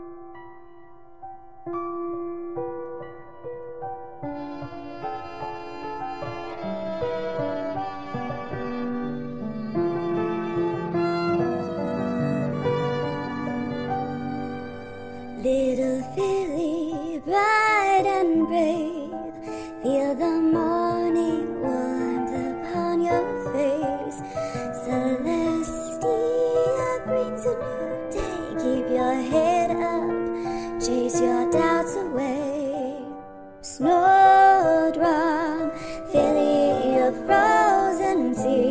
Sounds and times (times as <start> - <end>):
Lullaby: 10.8 - 38.7.